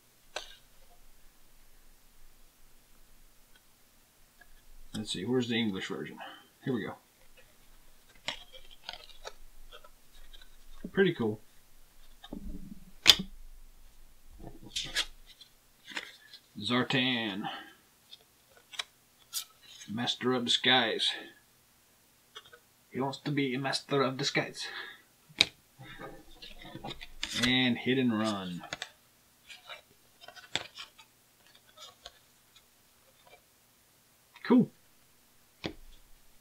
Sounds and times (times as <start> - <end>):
Inside, small room: 0.0 - 36.4
Speech: 5.0 - 7.0, 10.9 - 11.4, 16.6 - 17.8, 19.9 - 21.4, 23.0 - 24.8, 27.4 - 28.8, 34.4 - 34.8.